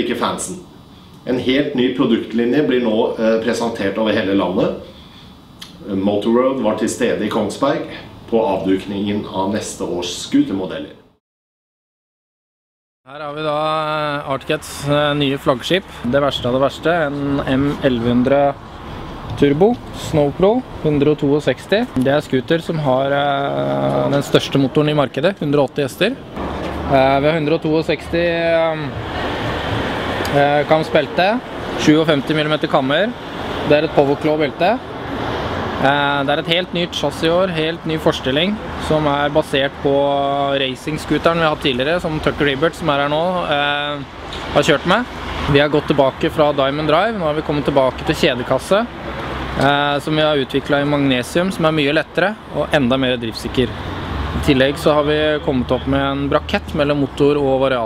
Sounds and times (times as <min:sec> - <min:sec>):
Speech: 0:00.0 - 0:04.9, 0:05.8 - 0:11.1, 0:13.1 - 0:18.6, 0:19.3 - 0:26.2, 0:26.9 - 0:29.0, 0:30.3 - 0:34.8, 0:35.8 - 0:48.9, 0:49.6 - 0:53.7, 0:54.4 - 0:57.8.